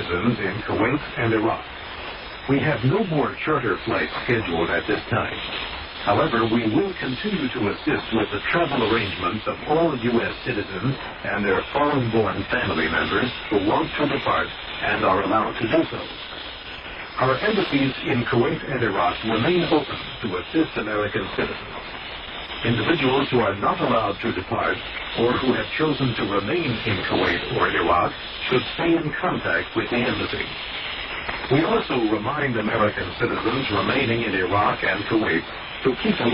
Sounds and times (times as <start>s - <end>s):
Speech: 0.0s - 1.7s, 2.5s - 16.1s, 17.2s - 21.8s, 22.6s - 30.6s, 31.5s - 36.3s
Radio: 0.0s - 36.3s.